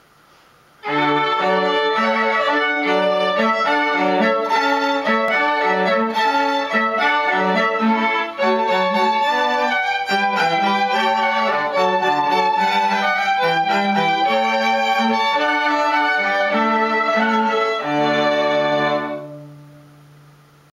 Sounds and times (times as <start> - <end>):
Music: 0.8 - 20.5.